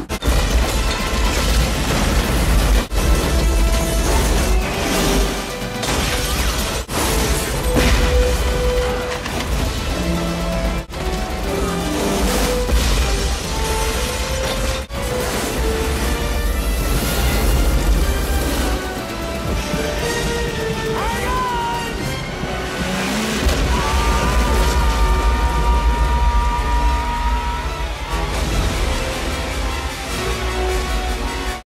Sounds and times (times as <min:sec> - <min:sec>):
Eruption: 0:00.0 - 0:31.6
Music: 0:00.0 - 0:31.6.